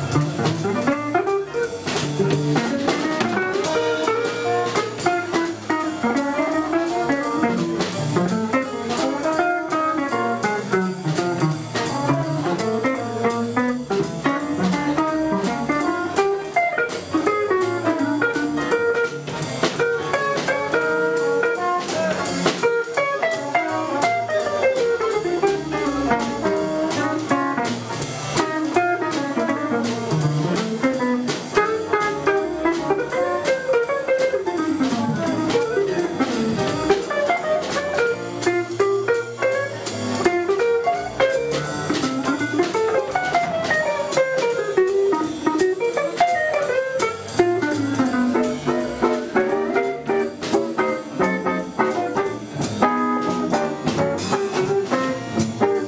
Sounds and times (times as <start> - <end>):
Swing music: 0.0 - 55.8.